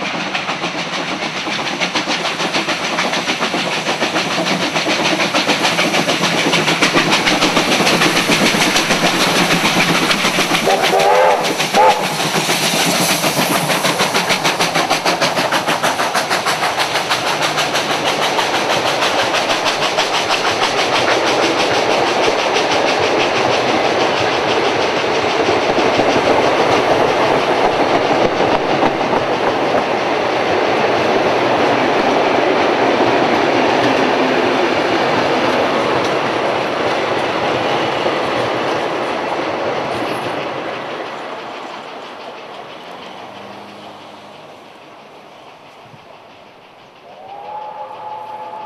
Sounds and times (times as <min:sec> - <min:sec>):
Hiss: 0:00.0 - 0:48.6.